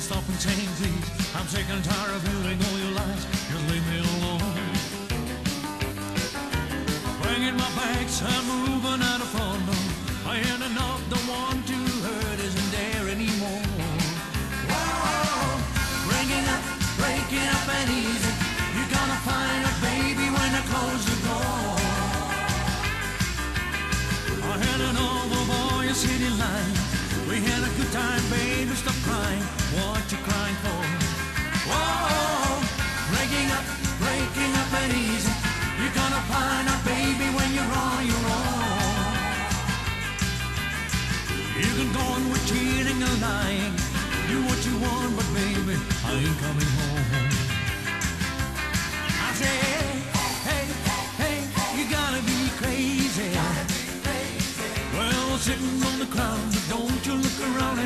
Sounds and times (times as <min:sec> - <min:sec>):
Music: 0:00.0 - 0:57.8.